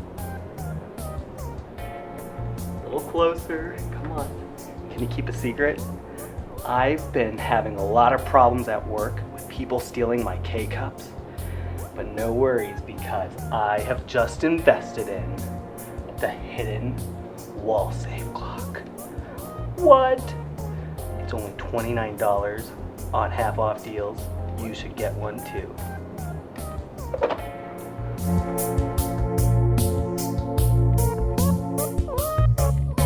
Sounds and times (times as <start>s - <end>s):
Music: 0.0s - 33.0s
Speech: 2.8s - 5.8s, 6.6s - 11.1s, 12.0s - 15.4s, 16.2s - 17.0s, 17.6s - 18.8s, 19.8s - 20.4s, 21.2s - 25.8s.